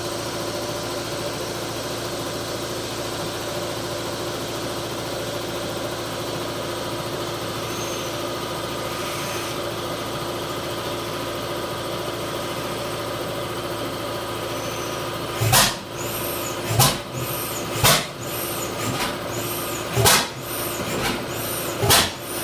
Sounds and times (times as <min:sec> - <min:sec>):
Jet engine: 0:07.4 - 0:10.1, 0:14.4 - 0:22.4.